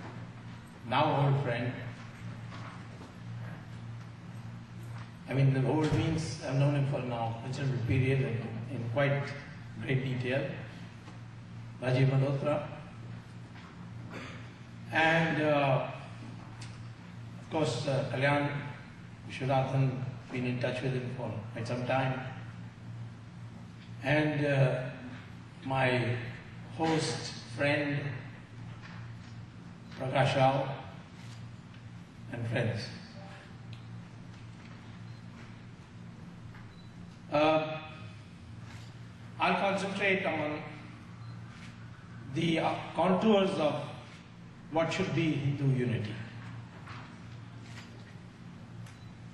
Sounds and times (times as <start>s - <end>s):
Narration, monologue: 0.0s - 49.3s
Male speech, man speaking: 0.9s - 2.0s, 5.3s - 10.7s, 11.8s - 12.9s, 14.9s - 16.0s, 17.5s - 22.4s, 24.0s - 25.0s, 25.6s - 28.3s, 30.0s - 31.0s, 32.3s - 33.2s, 37.3s - 38.0s, 39.4s - 40.9s, 42.3s - 44.1s, 44.7s - 46.4s.